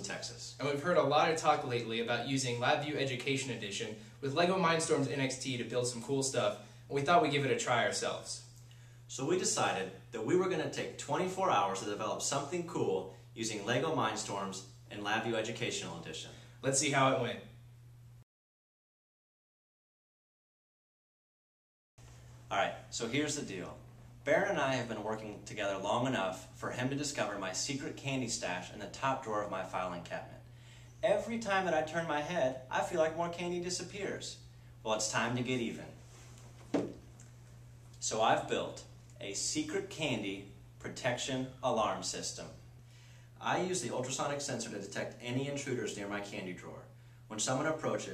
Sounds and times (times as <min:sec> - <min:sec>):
Speech: 0:00.0 - 0:08.5, 0:09.1 - 0:17.5, 0:22.5 - 0:30.4, 0:31.0 - 0:36.0, 0:38.0 - 0:42.6, 0:43.4 - 0:48.1.